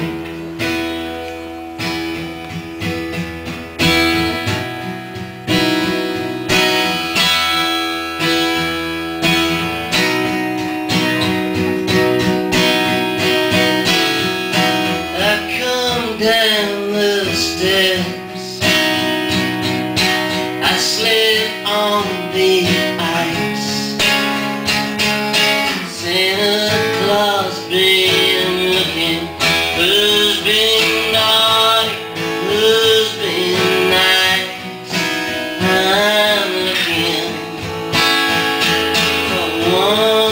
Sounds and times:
Music: 0.0 - 40.3
Male singing: 15.0 - 18.9, 20.6 - 24.0, 25.7 - 37.7, 39.2 - 40.3.

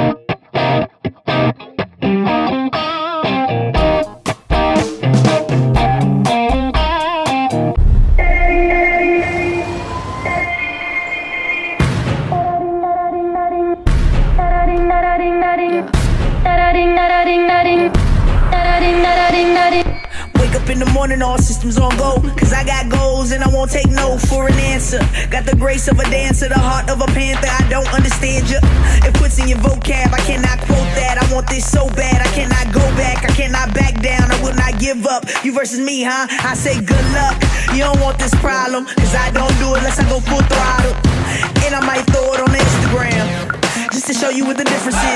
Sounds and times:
Music: 0.0 - 45.1.

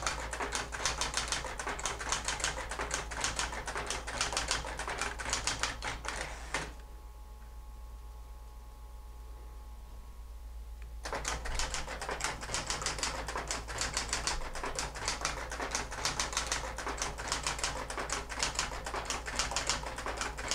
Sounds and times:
Typewriter: 0.0 - 6.7, 11.1 - 20.5.

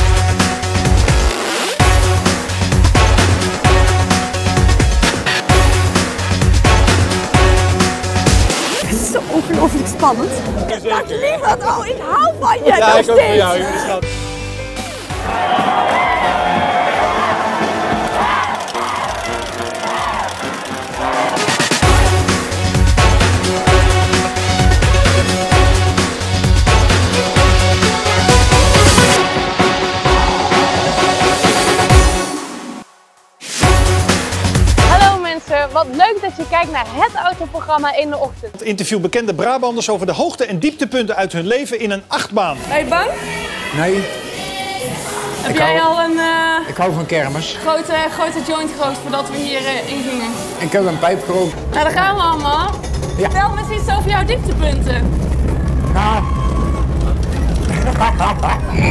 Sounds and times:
Soundtrack music: 0.0 - 40.2, 42.1 - 58.9.

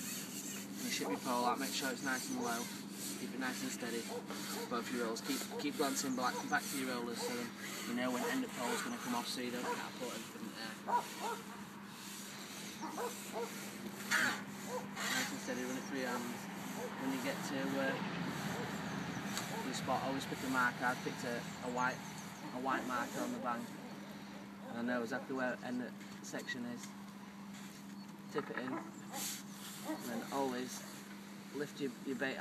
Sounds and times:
Outside, rural or natural: 0.0 - 24.8
Speech: 0.8 - 10.8, 15.1 - 16.4, 17.0 - 18.1, 19.6 - 23.7, 24.7 - 26.9, 28.3 - 28.8, 30.0 - 30.8, 31.6 - 32.4.

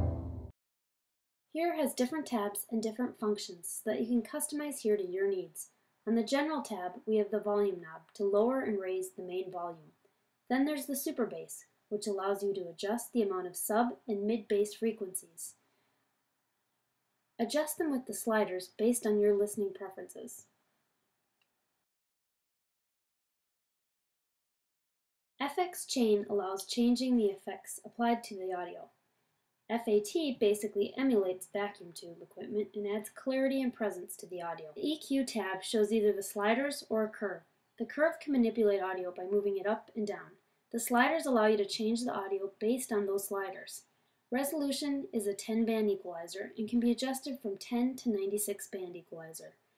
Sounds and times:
Speech: 1.6 - 9.9, 10.5 - 15.6, 17.4 - 20.5, 25.4 - 29.0, 29.7 - 49.6.

